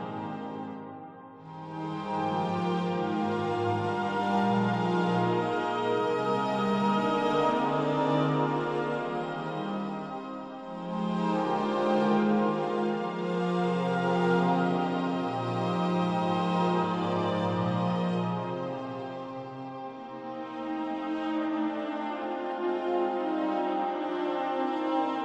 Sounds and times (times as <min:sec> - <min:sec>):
Background music: 0:00.0 - 0:25.2.